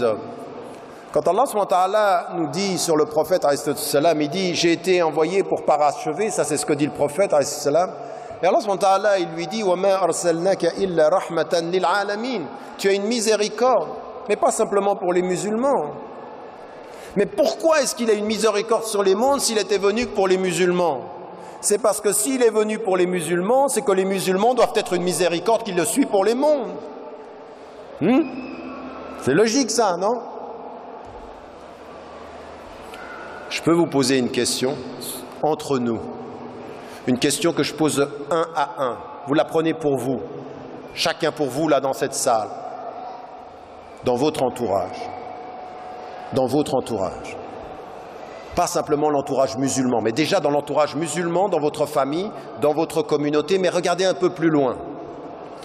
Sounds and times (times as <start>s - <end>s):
Speech: 0.0s - 0.3s, 1.2s - 16.0s, 17.2s - 26.8s, 28.0s - 28.4s, 29.2s - 30.2s, 33.5s - 36.1s, 37.1s - 40.3s, 41.0s - 42.6s, 44.0s - 45.1s, 46.3s - 47.4s, 48.6s - 54.9s.